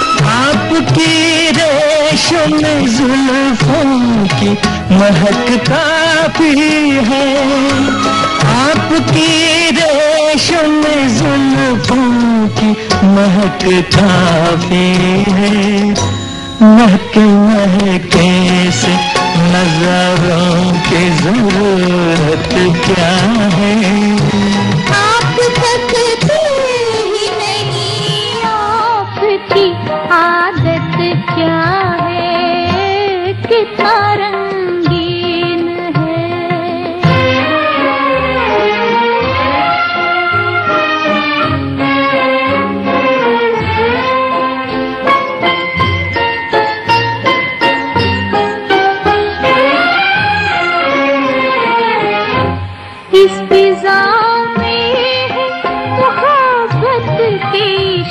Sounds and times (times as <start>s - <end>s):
Music of Bollywood: 0.0s - 58.1s.